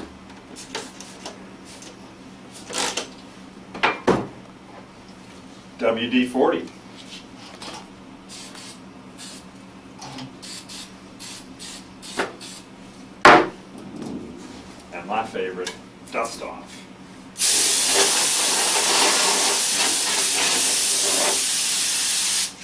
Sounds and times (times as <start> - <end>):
Speech: 5.8 - 6.7, 14.9 - 16.9.